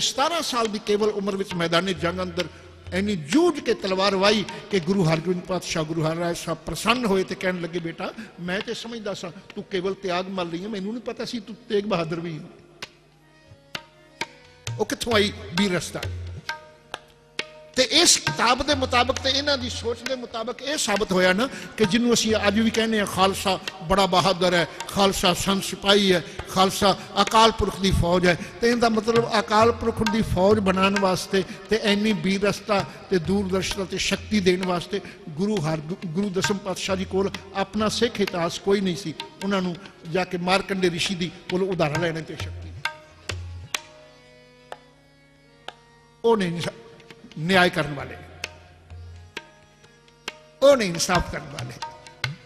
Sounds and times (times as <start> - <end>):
Speech: 0.0 - 12.6, 14.8 - 16.1, 17.8 - 42.7, 46.2 - 48.3, 50.6 - 51.8
Tabla: 0.0 - 52.4.